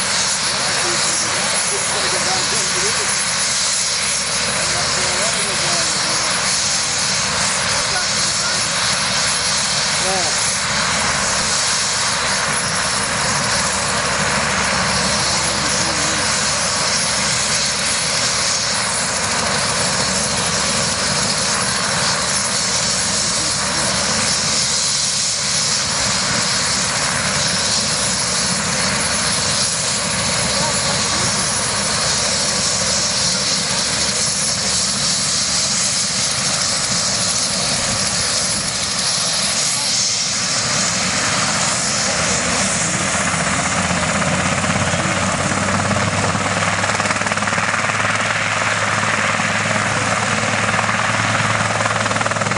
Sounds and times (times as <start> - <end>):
Aircraft engine: 0.0 - 52.5
Helicopter: 0.0 - 52.5.